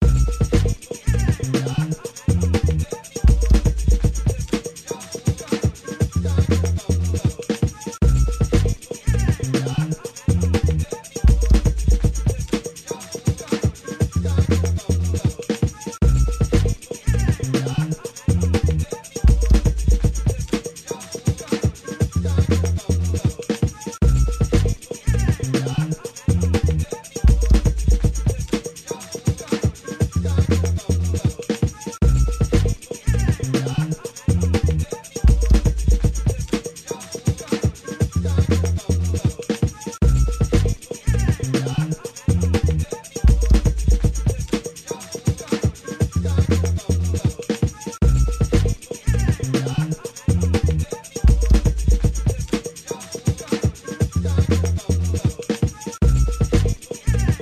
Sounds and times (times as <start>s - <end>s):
Music: 0.0s - 57.4s.